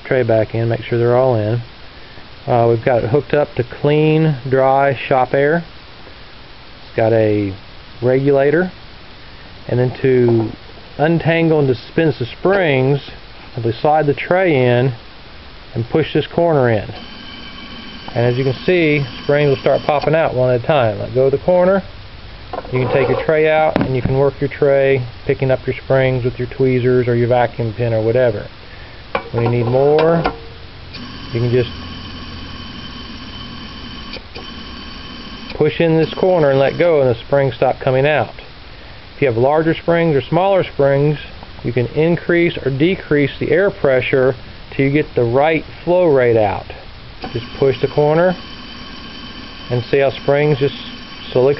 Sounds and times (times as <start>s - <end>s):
Speech: 0.0s - 1.7s, 2.4s - 5.7s, 7.0s - 8.8s, 9.7s - 15.0s, 15.7s - 17.0s, 18.2s - 21.9s, 22.7s - 28.5s, 29.3s - 30.3s, 31.4s - 31.8s, 35.6s - 38.5s, 39.2s - 48.4s, 49.7s - 51.5s.